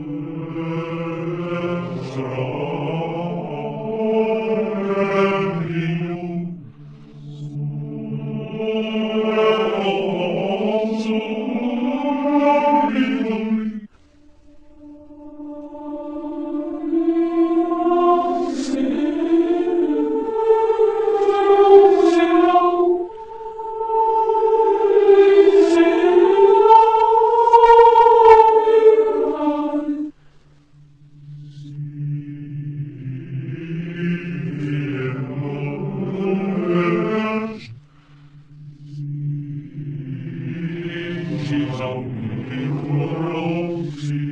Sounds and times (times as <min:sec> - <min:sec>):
Mantra: 0:00.0 - 0:13.9, 0:14.8 - 0:30.2, 0:31.1 - 0:37.8, 0:38.7 - 0:44.3.